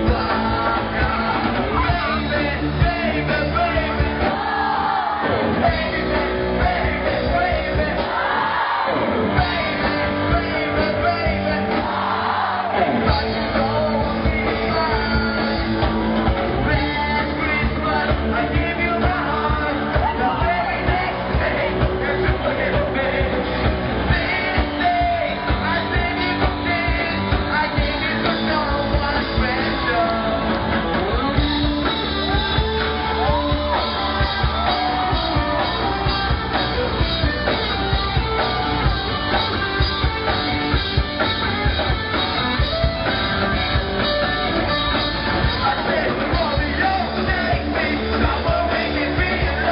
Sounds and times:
Male singing: 0:00.0 - 0:08.2, 0:09.4 - 0:15.6, 0:16.6 - 0:30.6, 0:45.6 - 0:49.7
Music: 0:00.0 - 0:49.7.

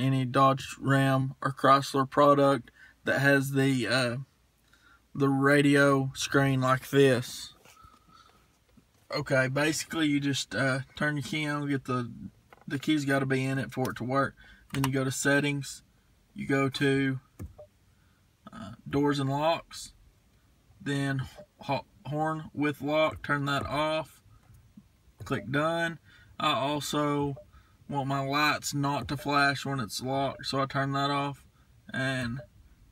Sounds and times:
Speech: 0:00.0 - 0:04.2, 0:05.2 - 0:07.6, 0:09.1 - 0:15.8, 0:16.4 - 0:17.2, 0:18.5 - 0:19.9, 0:20.8 - 0:24.1, 0:25.2 - 0:32.4.

